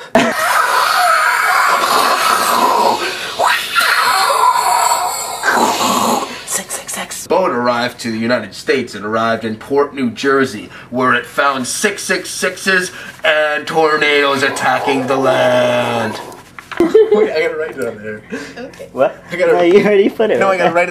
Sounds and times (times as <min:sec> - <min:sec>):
Speech: 0:06.9 - 0:16.3, 0:19.3 - 0:20.9.